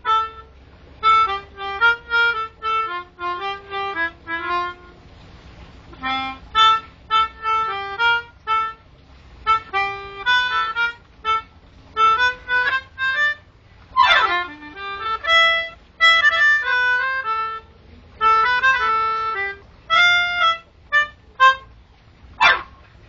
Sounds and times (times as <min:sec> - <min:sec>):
Music: 0:00.0 - 0:05.2, 0:05.9 - 0:21.8
Outside, rural or natural: 0:00.0 - 0:23.0.